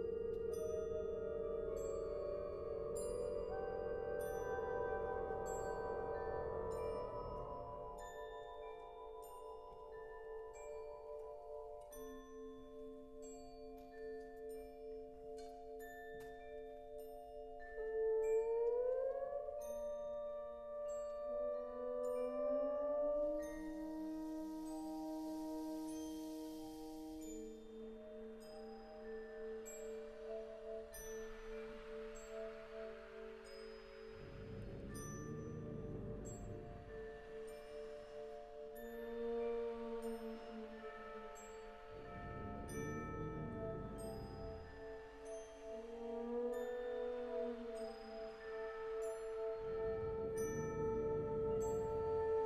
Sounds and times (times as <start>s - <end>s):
Music: 0.0s - 52.4s.